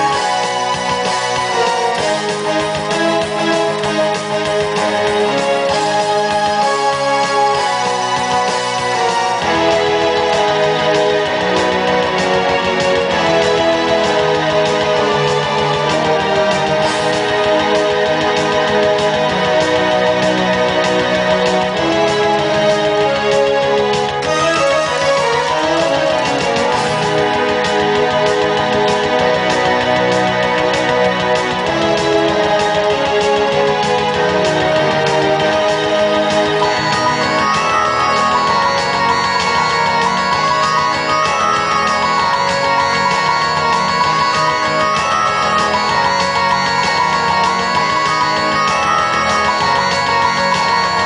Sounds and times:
Music: 0:00.0 - 0:51.0.

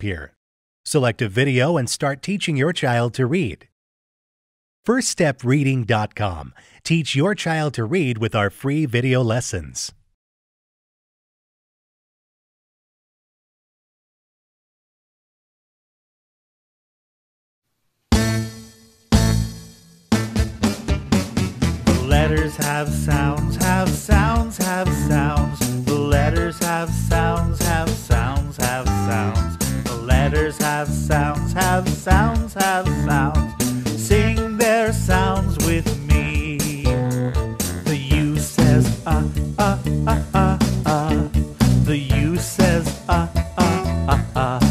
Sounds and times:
Music: 0:18.1 - 0:44.7.

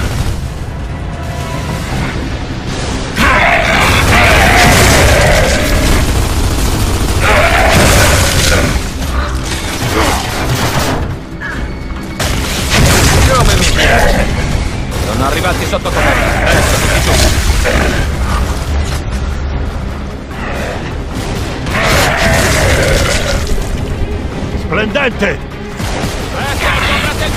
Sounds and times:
Music: 0:00.0 - 0:27.3.

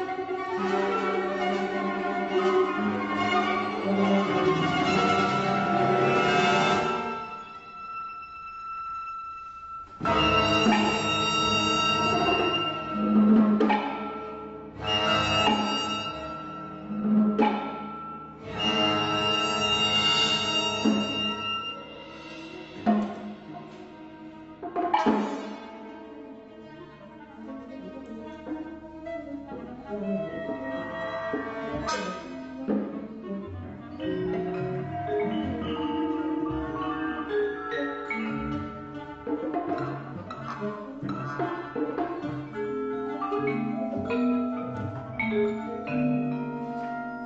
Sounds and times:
Bowed string instrument: 0:00.0 - 0:47.2
Classical music: 0:00.0 - 0:47.2
Orchestra: 0:00.0 - 0:47.2
Percussion: 0:00.0 - 0:47.2
Piano: 0:29.9 - 0:47.2.

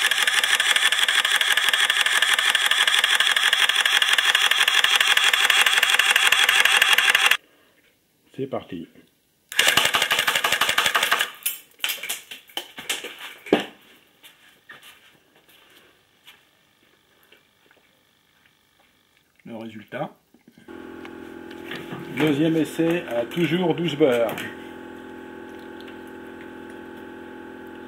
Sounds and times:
Speech: 0:08.3 - 0:09.1, 0:19.4 - 0:20.2, 0:22.1 - 0:24.6.

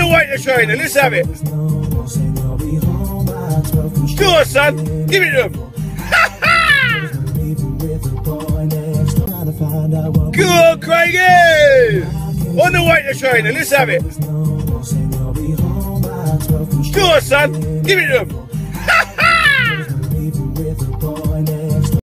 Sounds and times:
Speech: 0:00.0 - 0:01.3, 0:04.2 - 0:05.6, 0:10.4 - 0:14.0, 0:16.9 - 0:18.3
Music: 0:00.0 - 0:22.0.

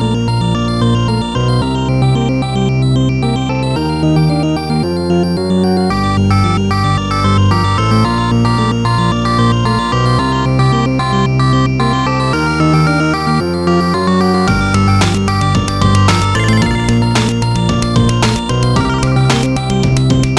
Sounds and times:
Music: 0:00.0 - 0:20.3.

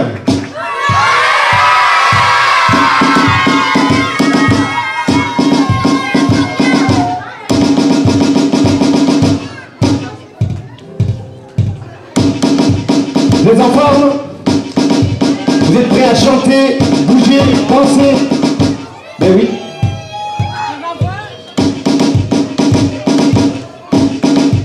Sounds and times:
Music: 0:00.0 - 0:24.6.

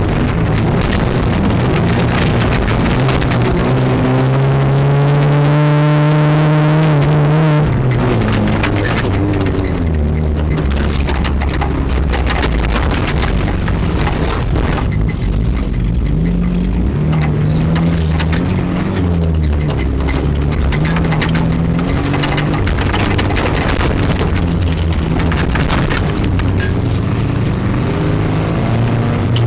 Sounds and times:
Car: 0:00.0 - 0:29.4.

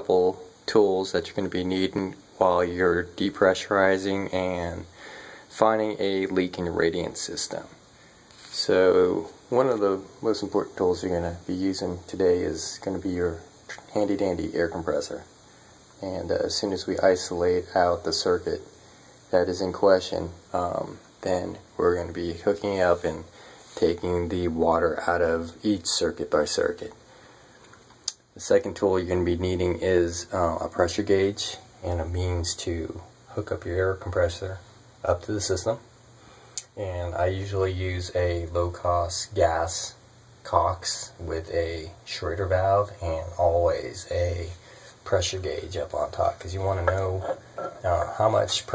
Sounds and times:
Speech: 0:00.0 - 0:07.8, 0:08.4 - 0:15.3, 0:16.0 - 0:18.7, 0:19.3 - 0:27.0, 0:28.3 - 0:35.9, 0:36.6 - 0:48.7.

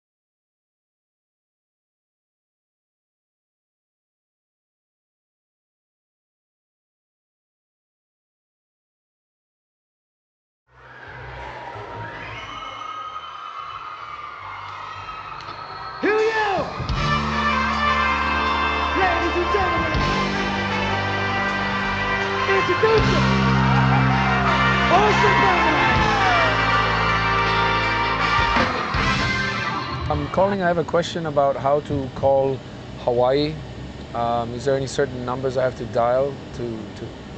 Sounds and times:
Music: 0:14.8 - 0:30.6
Speech: 0:30.1 - 0:33.6, 0:34.2 - 0:37.2.

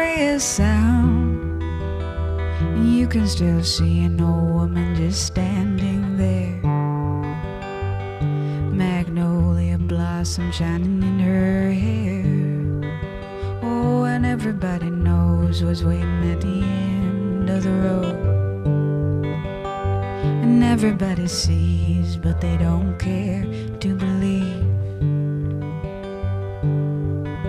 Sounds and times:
Acoustic guitar: 0:00.0 - 0:27.4.

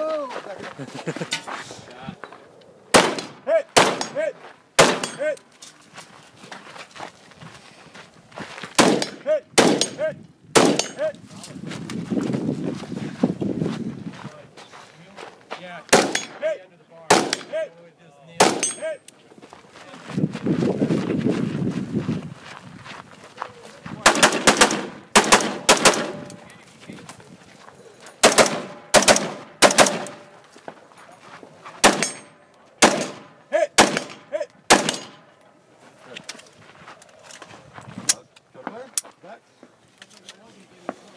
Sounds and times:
Speech: 0:14.2 - 0:19.0, 0:23.4 - 0:24.2, 0:38.1 - 0:39.4, 0:40.2 - 0:41.1.

